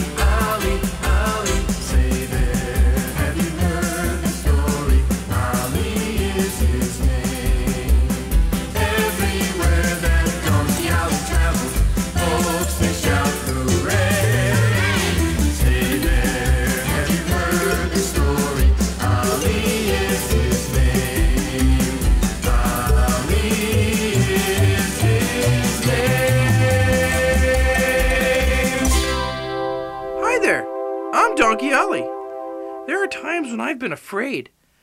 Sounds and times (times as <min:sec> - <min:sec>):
Music: 0:00.0 - 0:33.8
Speech: 0:30.2 - 0:30.6, 0:31.2 - 0:32.1, 0:32.9 - 0:34.6.